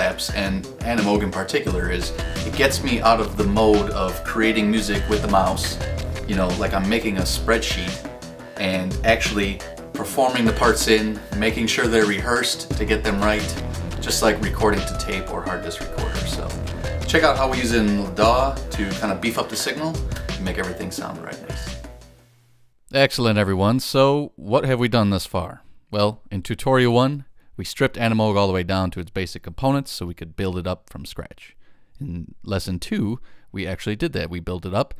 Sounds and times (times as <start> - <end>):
Speech: 0.0 - 8.0, 8.6 - 21.7, 22.9 - 34.9
Music: 0.0 - 22.3.